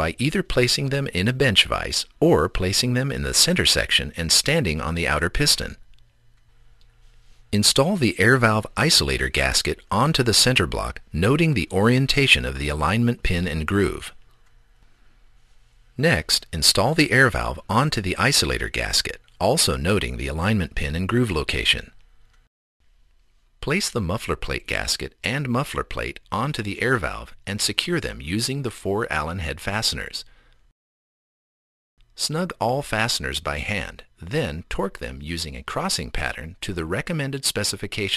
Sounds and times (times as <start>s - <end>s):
Speech: 0.0s - 5.8s, 7.6s - 14.2s, 16.0s - 22.0s, 23.6s - 30.3s, 32.2s - 38.1s.